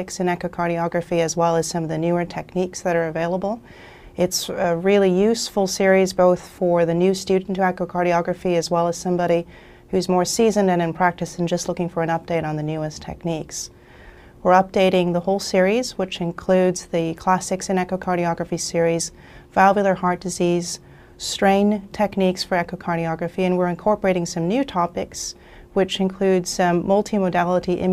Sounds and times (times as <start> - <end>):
Speech: 0.0 - 3.6, 4.2 - 13.7, 14.4 - 27.9.